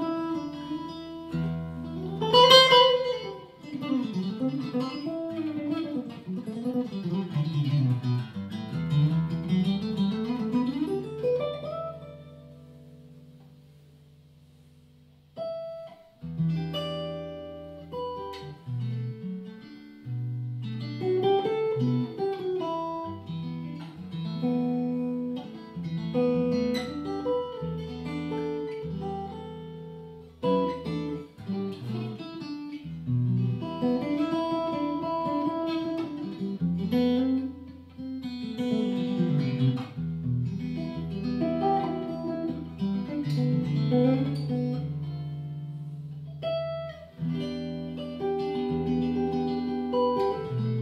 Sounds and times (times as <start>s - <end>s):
Acoustic guitar: 0.0s - 50.8s.